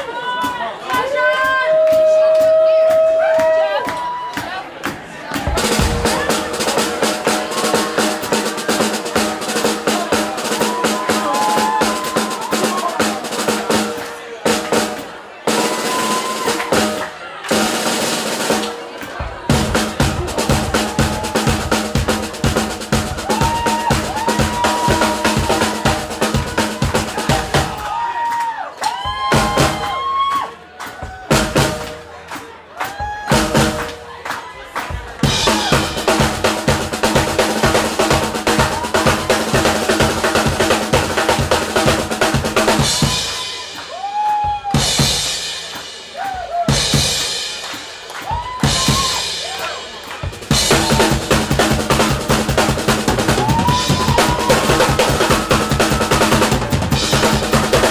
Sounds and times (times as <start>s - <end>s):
Drum kit: 0.0s - 57.9s
Drum roll: 1.4s - 57.9s
Bass drum: 5.4s - 17.7s, 19.2s - 28.0s, 29.0s - 30.2s, 30.9s - 32.2s, 32.9s - 34.1s, 34.9s - 47.4s, 48.2s - 57.9s.